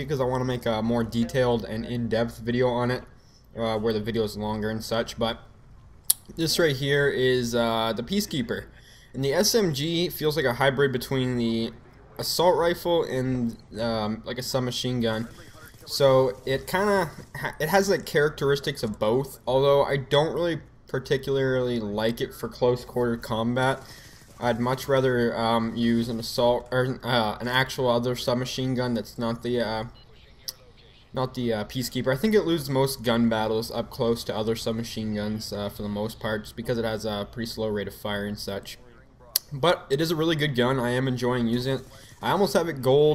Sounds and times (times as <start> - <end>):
Speech: 0.0 - 5.5, 6.2 - 43.1.